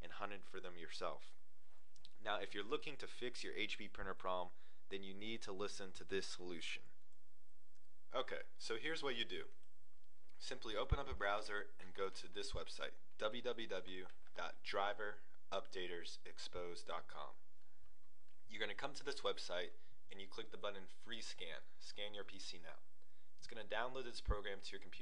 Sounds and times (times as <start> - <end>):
Speech: 0.0 - 1.4, 2.2 - 6.9, 8.1 - 9.5, 10.4 - 17.4, 18.5 - 22.8, 23.4 - 25.0.